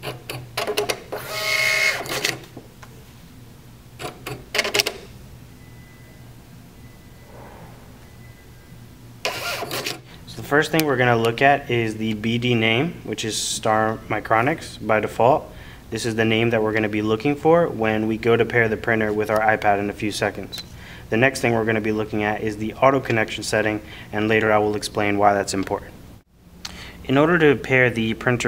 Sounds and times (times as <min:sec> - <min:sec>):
Printer: 0:00.0 - 0:02.4, 0:09.3 - 0:10.0
Speech: 0:10.3 - 0:26.0, 0:27.0 - 0:28.4.